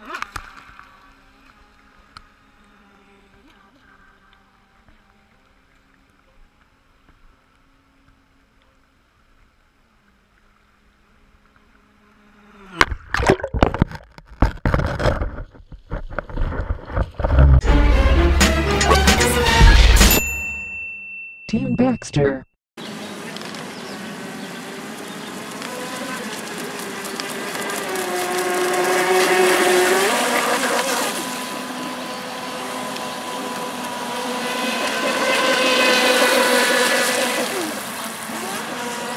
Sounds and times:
Music: 17.6 - 20.3.

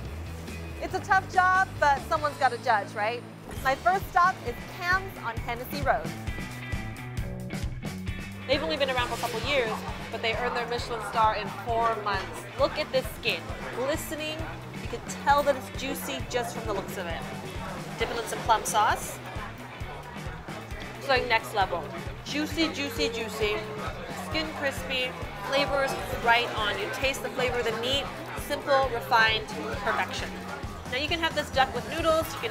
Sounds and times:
Music: 0.0 - 32.5
Speech: 8.5 - 17.3, 18.0 - 19.2, 21.0 - 32.5.

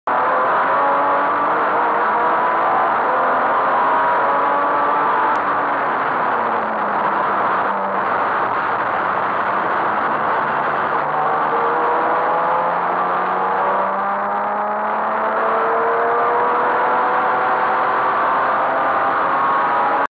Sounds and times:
Car: 0.1 - 20.1
Medium engine (mid frequency): 0.1 - 20.1.

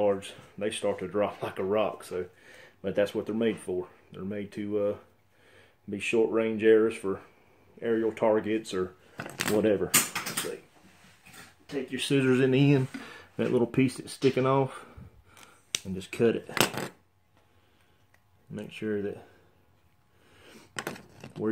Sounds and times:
Speech: 0.0 - 5.1, 5.9 - 10.7, 11.7 - 14.9, 15.8 - 16.6, 18.5 - 19.4.

